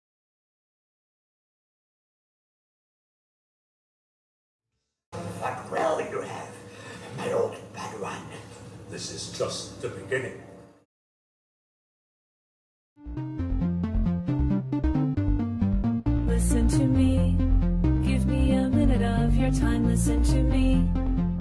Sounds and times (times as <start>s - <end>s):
Speech: 5.3s - 10.5s.